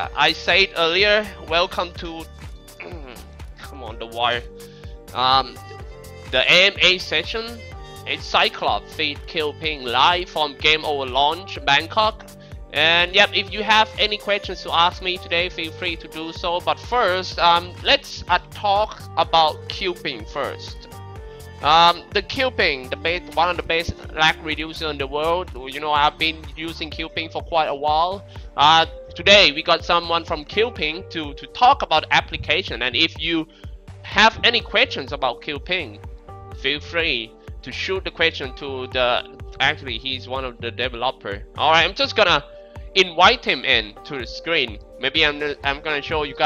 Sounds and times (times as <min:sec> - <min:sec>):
Speech: 0:00.0 - 0:04.5, 0:05.2 - 0:05.6, 0:06.3 - 0:20.8, 0:21.6 - 0:36.0, 0:36.6 - 0:42.4, 0:43.0 - 0:46.4
Music: 0:00.0 - 0:46.4.